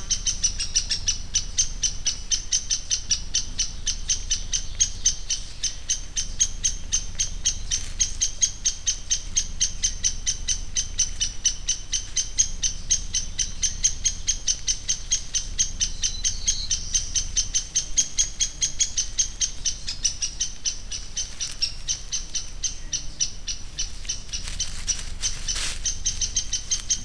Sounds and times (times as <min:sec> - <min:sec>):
Animal: 0:00.0 - 0:27.0.